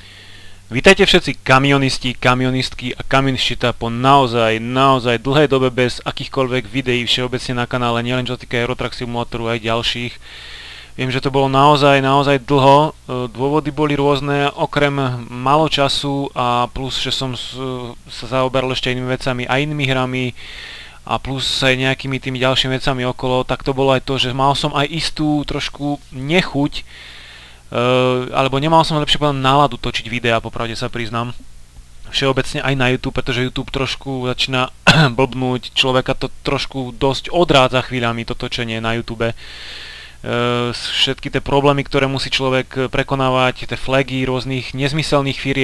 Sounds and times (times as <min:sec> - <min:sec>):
Speech: 0:00.7 - 0:10.2, 0:11.0 - 0:20.4, 0:21.1 - 0:26.9, 0:27.7 - 0:31.4, 0:32.0 - 0:39.4, 0:40.2 - 0:45.6.